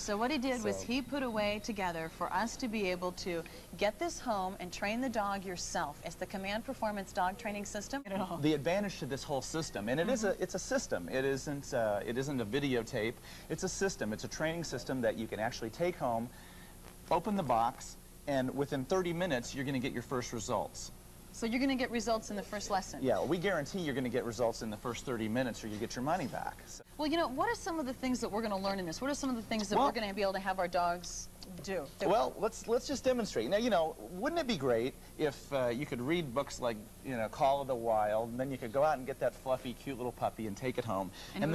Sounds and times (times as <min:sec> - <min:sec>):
Speech: 0:00.0 - 0:03.2, 0:03.9 - 0:16.3, 0:21.6 - 0:41.5.